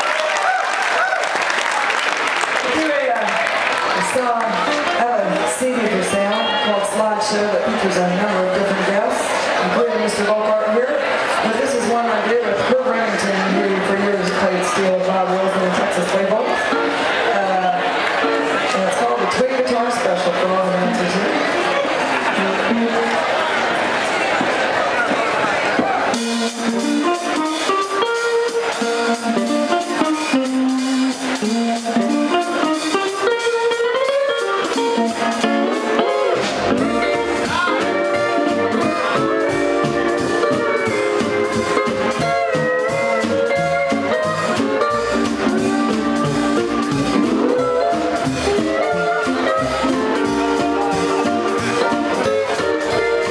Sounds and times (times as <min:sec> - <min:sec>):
Speech: 0:02.6 - 0:23.1
Musical instrument: 0:03.8 - 0:08.8, 0:20.6 - 0:23.8, 0:26.1 - 0:53.3.